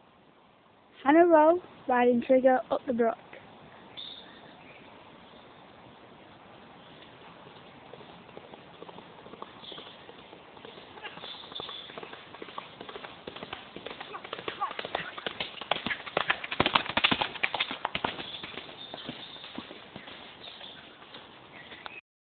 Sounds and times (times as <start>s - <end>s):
Clip-clop: 6.3s - 22.0s.